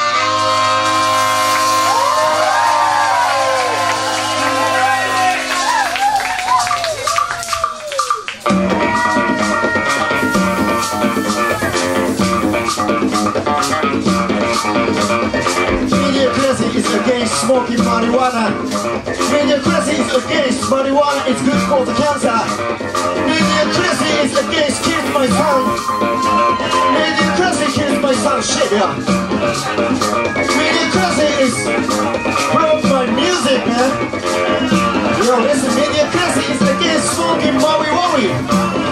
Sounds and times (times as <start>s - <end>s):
Music: 0.0s - 38.9s
Speech: 16.0s - 22.5s, 26.9s - 29.0s, 30.5s - 31.6s, 32.5s - 34.0s, 35.2s - 38.4s.